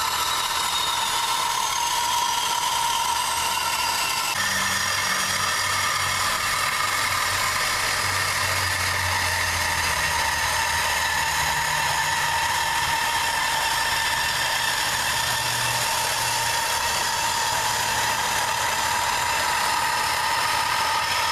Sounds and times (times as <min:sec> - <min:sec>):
Inside, large room or hall: 0:00.0 - 0:21.3.